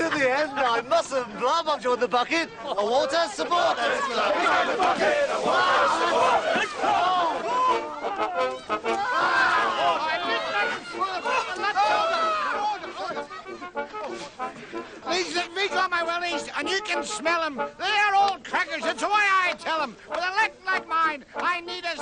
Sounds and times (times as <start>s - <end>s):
Music: 4.8s - 22.0s
Speech: 15.1s - 22.0s.